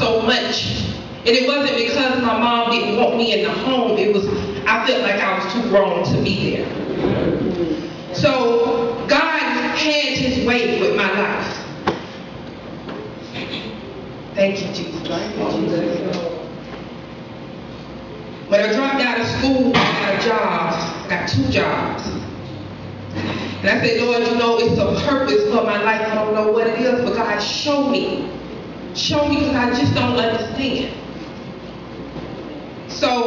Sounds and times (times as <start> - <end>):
Female speech, woman speaking: 0.0 - 6.8, 8.1 - 11.7, 14.4 - 16.1, 18.5 - 22.2, 23.6 - 28.4, 29.0 - 31.0, 32.9 - 33.2
Narration, monologue: 0.0 - 32.0.